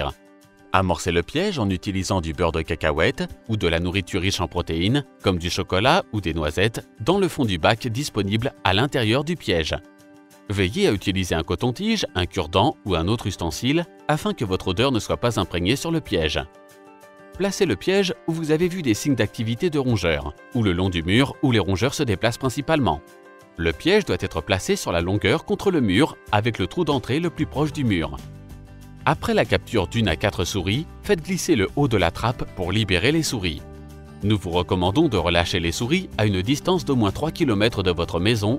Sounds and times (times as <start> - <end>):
Speech: 0.0 - 9.8, 10.5 - 16.5, 17.4 - 23.0, 23.6 - 28.2, 29.1 - 33.6, 34.2 - 38.5
Music: 0.0 - 38.5.